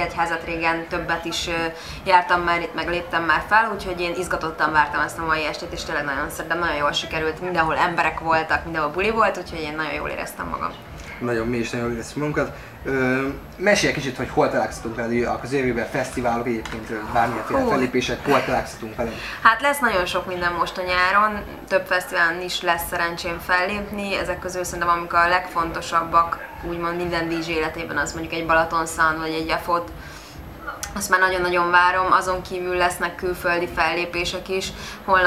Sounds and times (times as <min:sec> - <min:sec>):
Speech: 0:00.0 - 0:29.9.